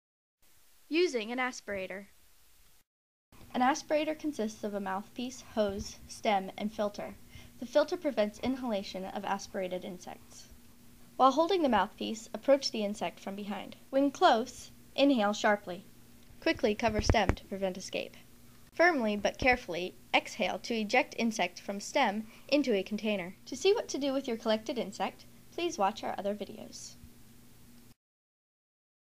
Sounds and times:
Speech: 0.9s - 2.1s, 3.5s - 10.5s, 11.2s - 15.8s, 16.4s - 18.2s, 18.8s - 27.0s.

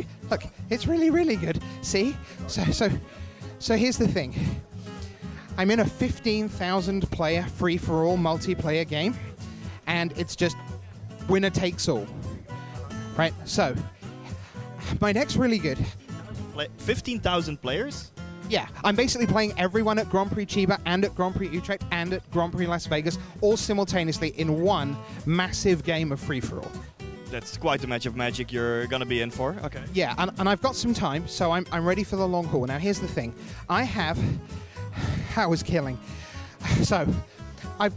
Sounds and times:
Speech: 0.0s - 3.0s, 3.6s - 4.5s, 5.6s - 9.2s, 9.9s - 10.6s, 11.3s - 12.1s, 13.2s - 13.9s, 14.8s - 26.7s, 27.3s - 34.4s, 35.2s - 36.0s
Music: 0.0s - 37.9s.

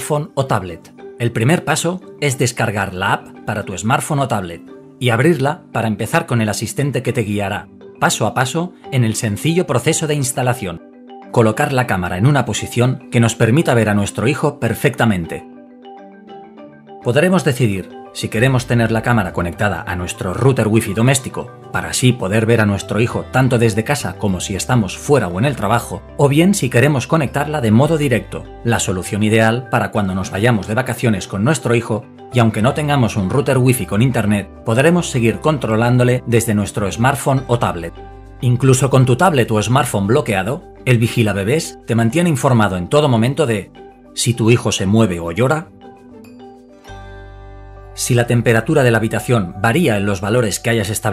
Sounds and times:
Speech: 0.0s - 10.8s, 11.4s - 15.5s, 17.1s - 45.7s, 48.0s - 51.1s
Music: 0.0s - 51.1s.

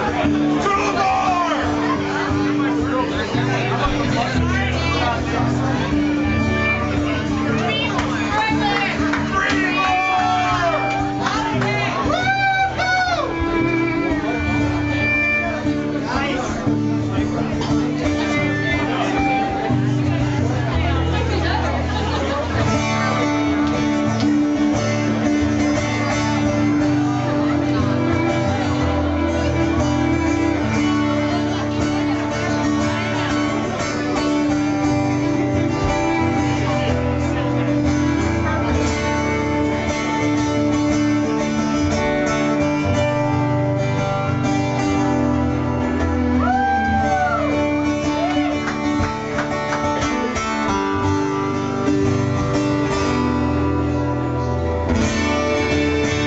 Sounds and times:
Speech: 0.0s - 43.1s
Music: 0.0s - 56.2s.

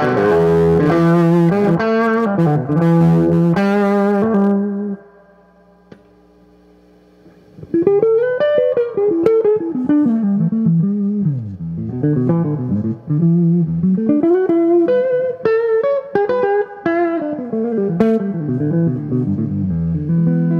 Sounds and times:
Music: 0.0s - 6.0s, 7.6s - 20.5s.

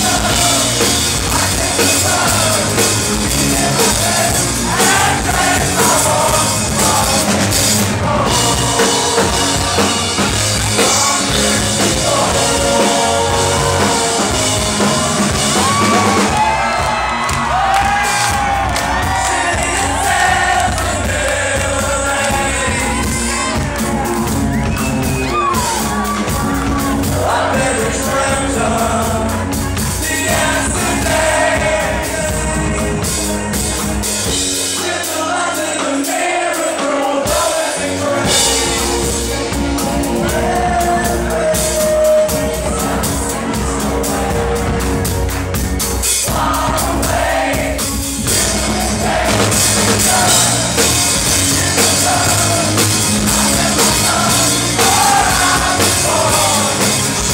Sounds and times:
Music: 0.0s - 57.3s.

